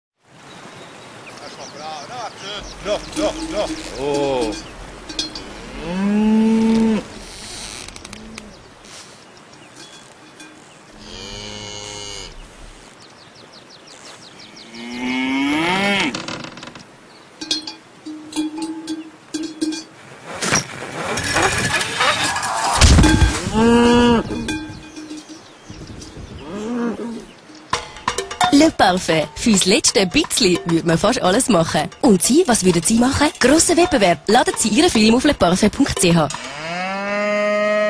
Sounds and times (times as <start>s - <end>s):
Cowbell: 2.6s - 6.1s, 9.7s - 10.7s, 17.4s - 19.9s, 23.0s - 26.2s, 27.5s - 36.7s
Moo: 5.6s - 7.1s, 11.0s - 12.4s, 14.6s - 16.2s, 23.5s - 24.5s, 36.3s - 37.8s.